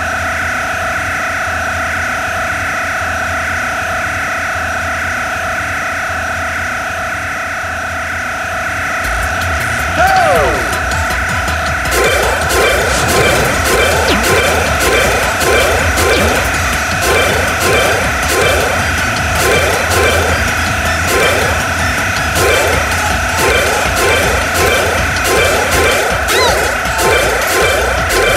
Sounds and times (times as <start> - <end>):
Music: 9.0 - 28.3.